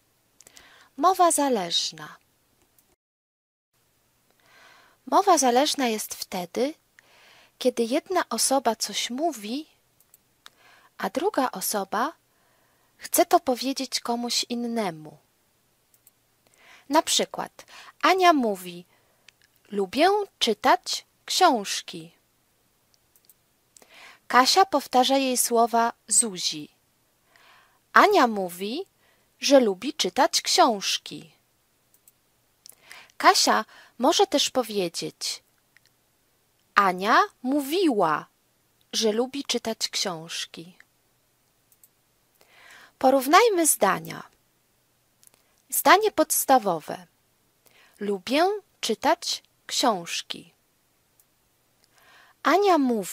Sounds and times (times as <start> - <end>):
Female speech, woman speaking: 1.0 - 2.2, 5.1 - 6.8, 7.6 - 9.8, 11.0 - 12.2, 13.0 - 15.2, 16.9 - 18.9, 19.7 - 22.2, 24.3 - 26.8, 28.0 - 31.4, 33.2 - 35.4, 36.8 - 38.3, 38.9 - 40.8, 43.0 - 44.3, 45.7 - 47.1, 48.0 - 50.6, 52.4 - 53.1.